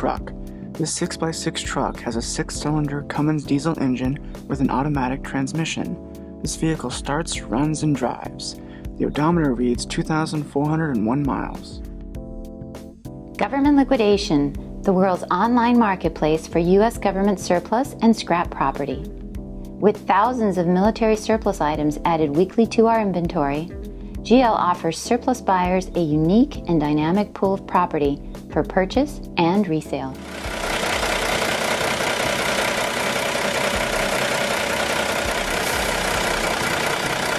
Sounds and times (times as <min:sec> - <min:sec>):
Speech: 0:00.0 - 0:11.8, 0:13.4 - 0:19.1, 0:19.8 - 0:30.2
Music: 0:00.0 - 0:37.3
Truck: 0:30.2 - 0:37.3.